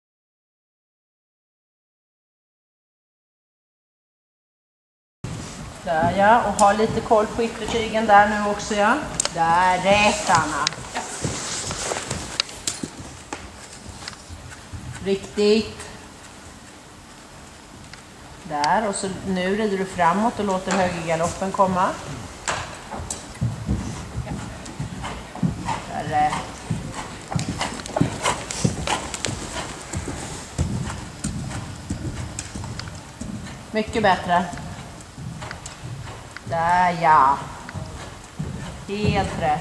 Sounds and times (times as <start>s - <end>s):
Horse: 5.3s - 39.6s
Speech: 5.9s - 10.8s, 15.0s - 16.0s, 18.5s - 22.0s, 25.9s - 26.4s, 33.8s - 34.5s, 36.5s - 37.5s, 38.9s - 39.6s.